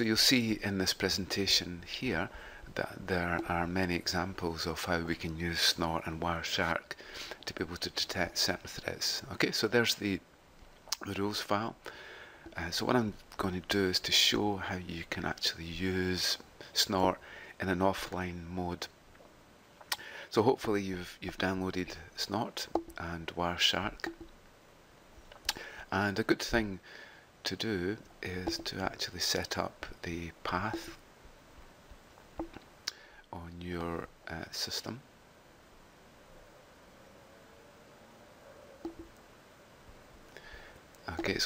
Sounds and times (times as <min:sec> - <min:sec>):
Speech: 0:00.0 - 0:10.2, 0:11.0 - 0:11.8, 0:12.5 - 0:18.9, 0:20.3 - 0:24.1, 0:25.9 - 0:26.8, 0:27.4 - 0:31.0, 0:33.3 - 0:35.1, 0:41.0 - 0:41.4.